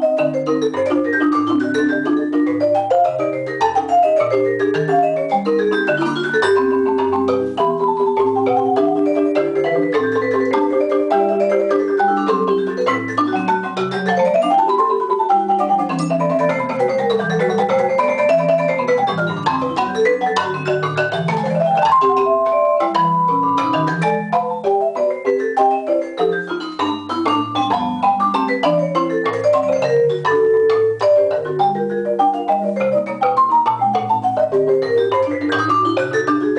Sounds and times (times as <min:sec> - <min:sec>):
Marimba, xylophone: 0:00.0 - 0:36.5
Vibraphone: 0:00.0 - 0:36.5.